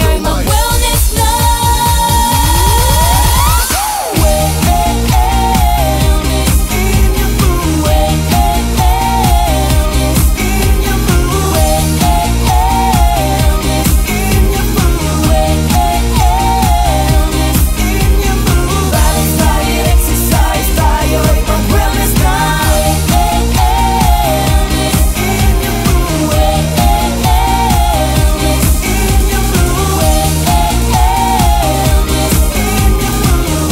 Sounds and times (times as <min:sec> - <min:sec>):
Pop music: 0:00.0 - 0:33.7.